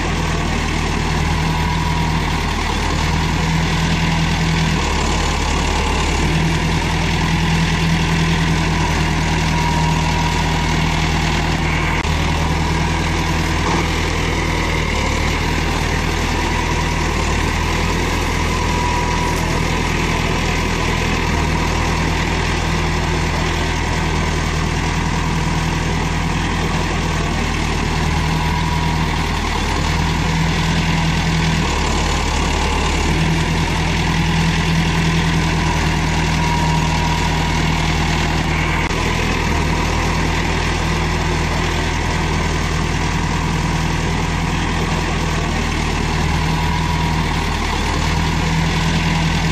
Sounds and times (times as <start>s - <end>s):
Outside, rural or natural: 0.0s - 49.5s
Vehicle: 0.0s - 49.5s.